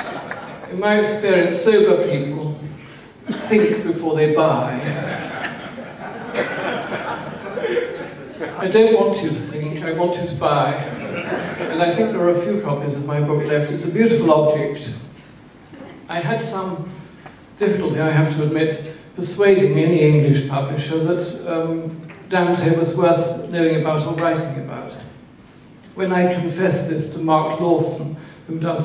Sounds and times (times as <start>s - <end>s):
Male speech, man speaking: 0.7s - 2.7s, 3.3s - 5.0s, 8.5s - 11.1s, 11.7s - 15.1s, 16.1s - 17.0s, 17.6s - 25.1s, 26.0s - 28.8s.